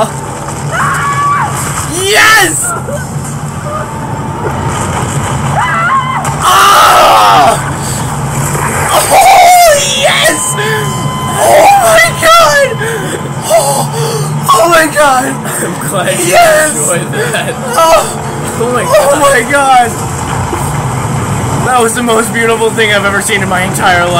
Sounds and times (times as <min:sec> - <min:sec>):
Outside, urban or manmade: 0:00.0 - 0:24.1.